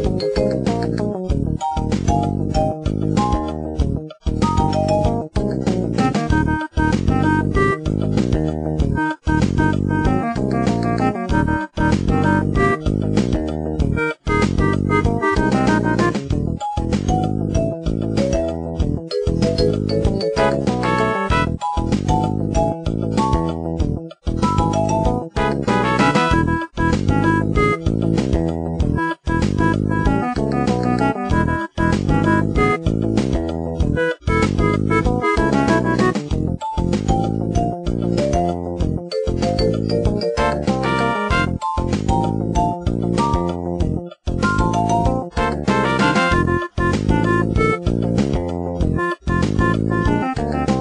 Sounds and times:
Music: 0:00.0 - 0:50.8.

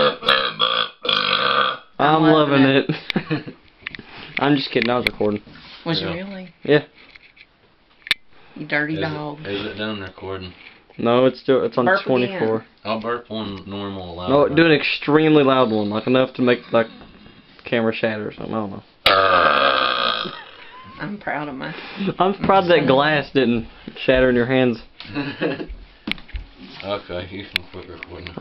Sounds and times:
Burping, eructation: 0:00.0 - 0:02.0, 0:19.0 - 0:20.7.

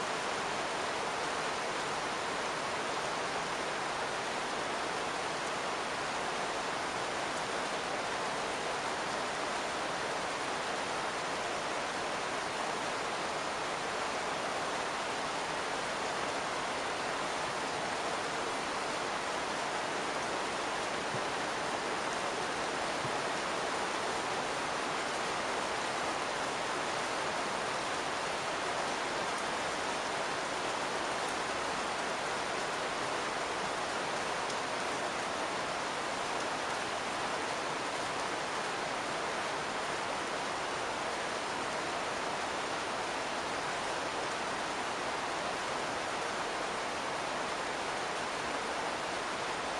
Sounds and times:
Rain: 0:00.0 - 0:49.7.

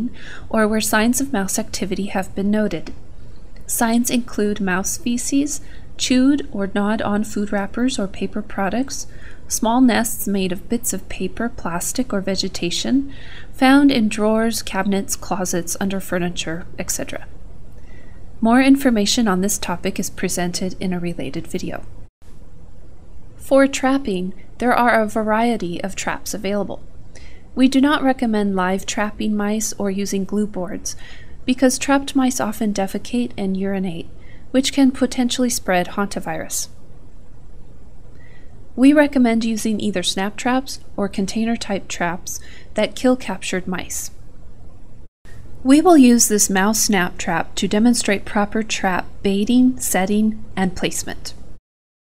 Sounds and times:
Speech: 0:00.0 - 0:03.0, 0:03.7 - 0:17.3, 0:18.4 - 0:21.9, 0:23.4 - 0:26.8, 0:27.6 - 0:36.8, 0:38.8 - 0:44.2, 0:45.7 - 0:51.4.

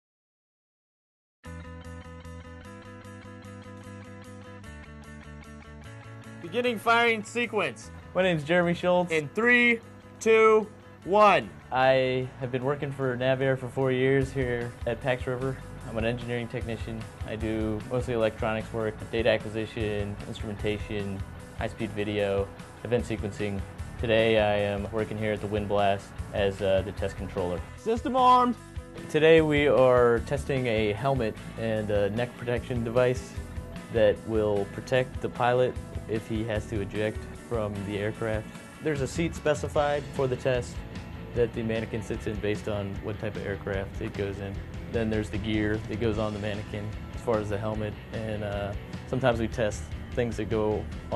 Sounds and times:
Music: 0:01.4 - 0:51.1
Speech: 0:06.4 - 0:40.8, 0:41.4 - 0:51.1.

